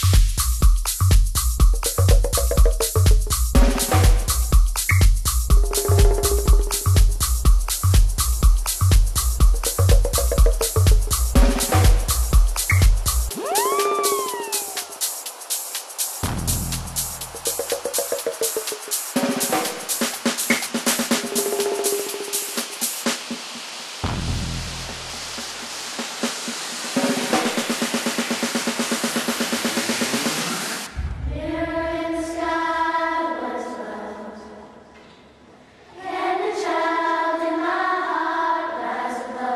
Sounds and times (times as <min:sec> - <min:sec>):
White noise: 0:05.5 - 0:31.1.